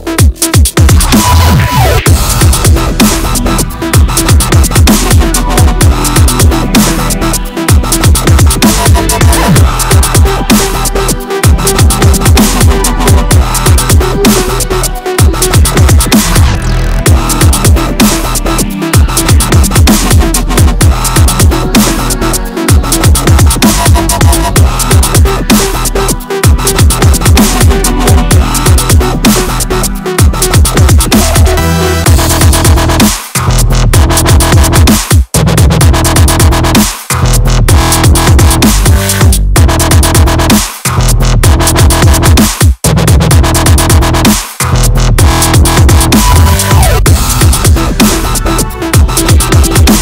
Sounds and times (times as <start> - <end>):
Drum and bass: 0.0 - 50.0.